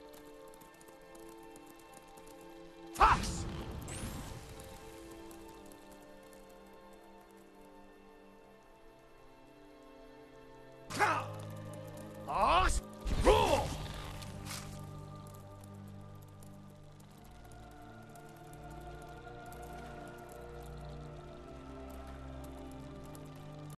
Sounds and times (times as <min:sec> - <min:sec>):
Music: 0:00.0 - 0:23.7.